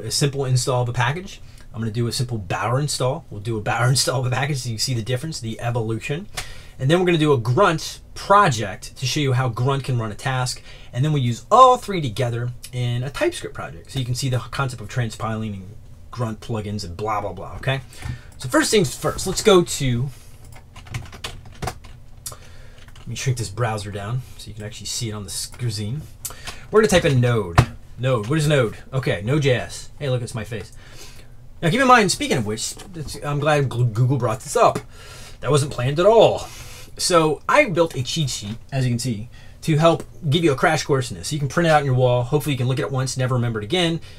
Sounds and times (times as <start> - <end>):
Speech: 0.0 - 20.2, 23.1 - 30.8, 31.6 - 44.0
Computer keyboard: 20.4 - 22.0.